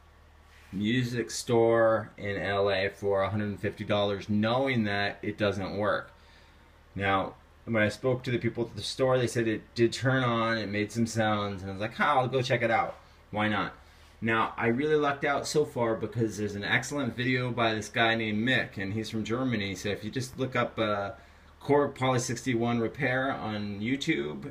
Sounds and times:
Speech: 0.7 - 6.2, 7.0 - 24.5.

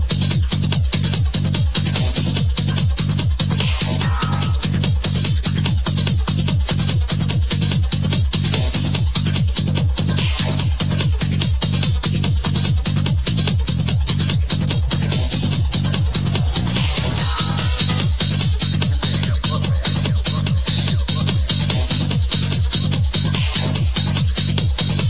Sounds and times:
Techno: 0.0 - 25.1.

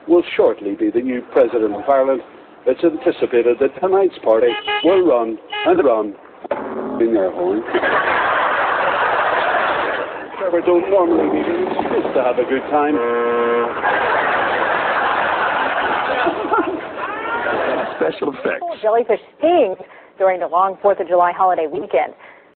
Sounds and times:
Vehicle horn, car horn, honking: 4.4 - 6.0, 12.9 - 13.8.

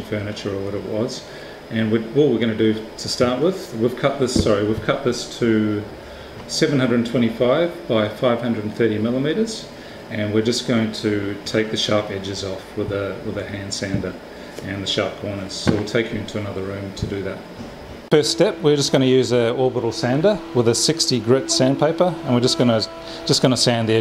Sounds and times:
Speech: 0.0 - 5.9, 6.5 - 17.5, 18.1 - 24.0.

